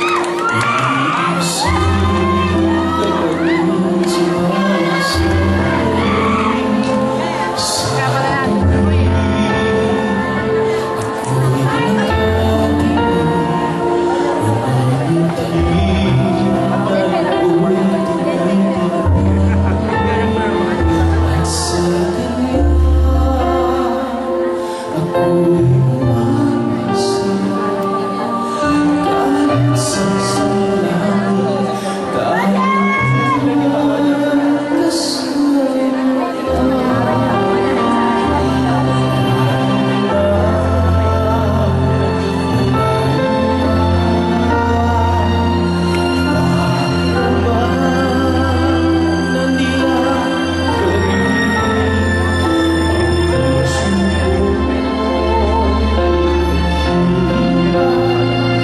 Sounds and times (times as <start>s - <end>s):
Male singing: 0.0s - 58.6s
Music: 0.0s - 58.6s.